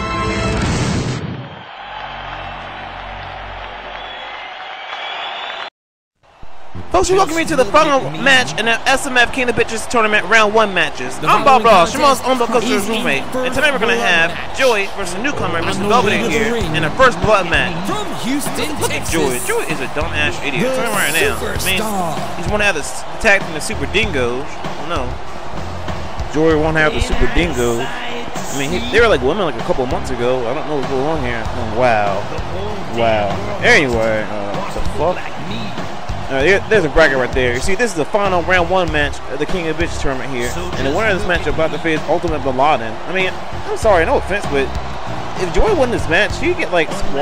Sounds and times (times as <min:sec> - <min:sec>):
Speech: 0:07.0 - 0:25.1, 0:26.3 - 0:44.7, 0:45.4 - 0:47.2.